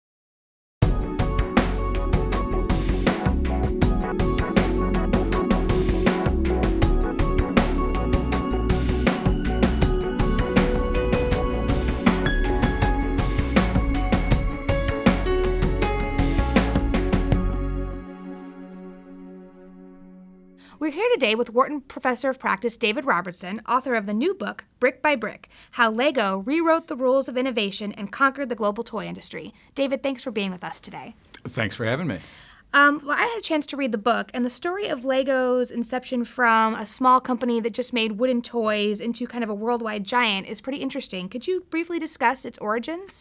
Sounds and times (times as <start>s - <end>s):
Speech: 20.8s - 32.2s, 32.8s - 43.2s.